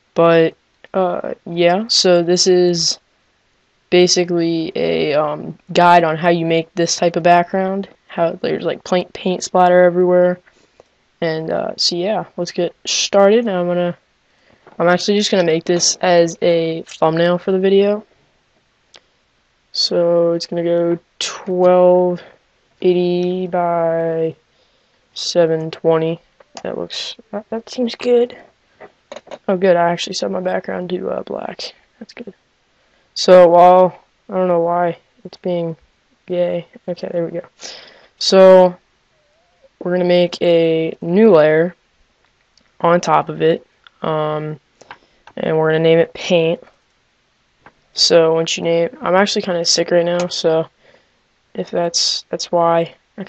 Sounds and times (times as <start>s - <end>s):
Speech: 0.2s - 3.0s, 4.0s - 10.4s, 11.2s - 14.0s, 14.8s - 18.1s, 19.8s - 24.4s, 25.2s - 28.5s, 29.2s - 32.4s, 33.2s - 38.8s, 39.8s - 41.8s, 42.8s - 44.6s, 45.4s - 46.7s, 48.0s - 50.7s, 51.6s - 53.2s.